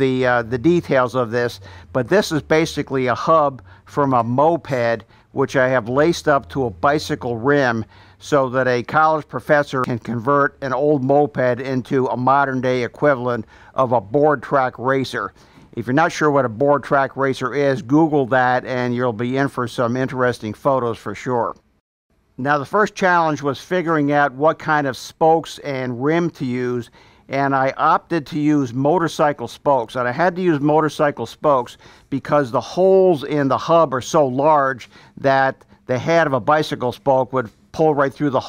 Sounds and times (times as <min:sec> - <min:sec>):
Speech: 0:00.0 - 0:21.6, 0:22.4 - 0:38.4.